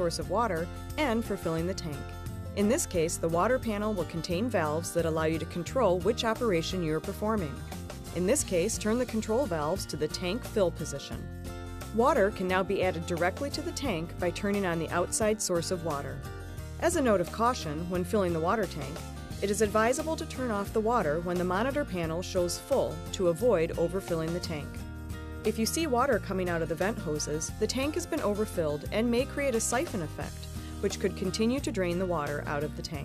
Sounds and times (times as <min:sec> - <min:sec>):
Speech: 0:00.0 - 0:07.6, 0:08.2 - 0:11.3, 0:12.0 - 0:16.2, 0:16.8 - 0:24.8, 0:25.5 - 0:33.0
Music: 0:00.0 - 0:33.0.